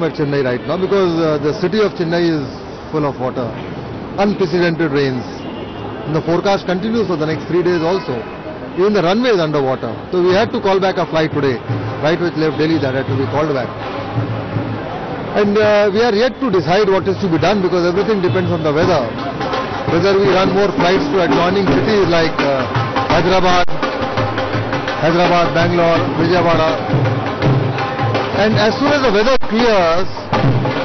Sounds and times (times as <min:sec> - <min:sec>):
Speech: 0:00.0 - 0:03.6, 0:04.2 - 0:05.4, 0:06.1 - 0:08.2, 0:08.8 - 0:13.7, 0:15.4 - 0:19.2, 0:19.9 - 0:23.7, 0:25.0 - 0:26.8, 0:28.4 - 0:30.2.